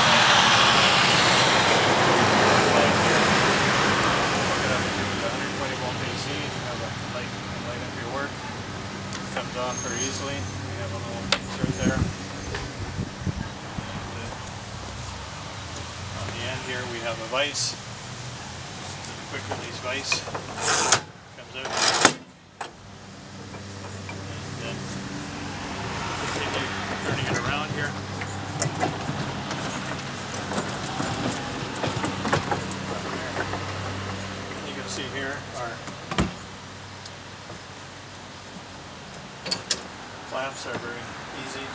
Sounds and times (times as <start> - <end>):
Speech: 2.7 - 3.1, 4.5 - 8.4, 9.3 - 12.1, 13.8 - 14.4, 16.2 - 17.8, 19.3 - 20.3, 21.4 - 21.8, 24.6 - 24.9, 26.4 - 28.0, 34.6 - 35.8, 40.3 - 41.7.